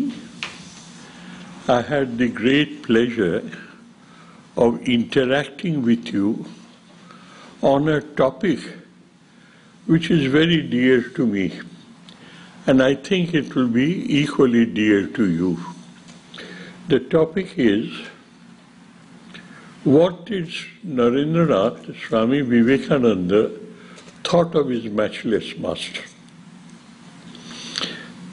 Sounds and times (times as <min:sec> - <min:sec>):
Speech: 0:00.0 - 0:00.3, 0:01.7 - 0:03.8, 0:04.6 - 0:06.6, 0:07.6 - 0:09.0, 0:09.9 - 0:11.8, 0:12.7 - 0:15.8, 0:16.9 - 0:18.2, 0:19.8 - 0:26.2.